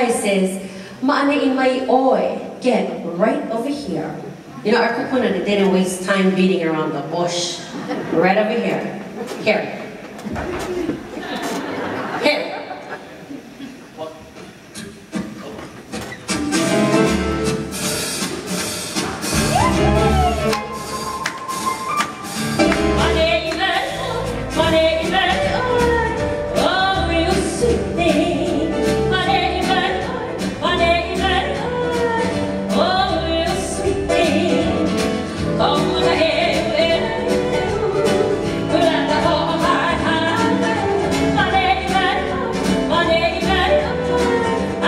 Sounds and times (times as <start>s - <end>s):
Music: 14.8s - 44.8s
Female singing: 23.0s - 44.8s.